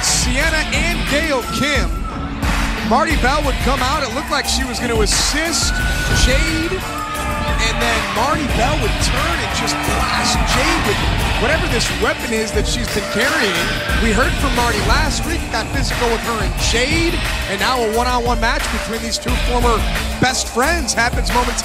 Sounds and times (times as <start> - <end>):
Speech: 0.0 - 1.9, 2.8 - 6.8, 7.6 - 21.6
Music: 0.0 - 21.6.